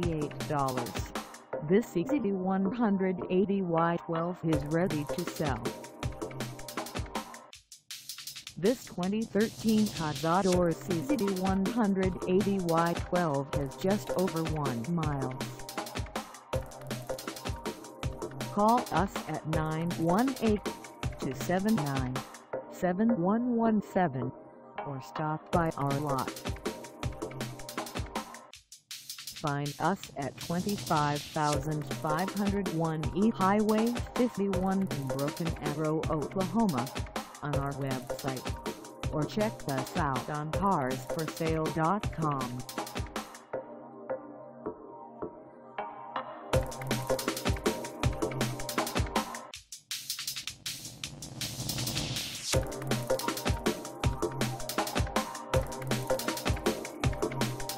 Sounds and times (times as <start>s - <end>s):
Speech: 0.0s - 1.1s, 1.7s - 5.6s, 8.6s - 15.6s, 18.5s - 22.2s, 22.8s - 24.3s, 24.9s - 26.3s, 29.4s - 38.4s, 39.2s - 42.6s
Music: 0.0s - 57.7s.